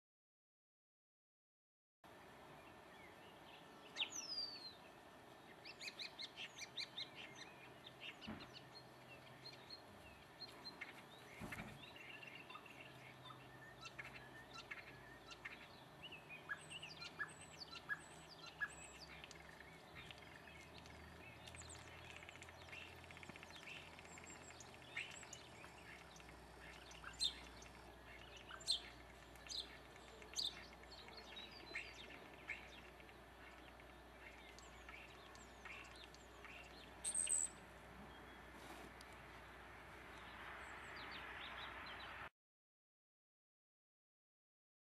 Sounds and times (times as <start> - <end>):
Chirp, tweet: 2.6 - 38.7, 39.4 - 42.3.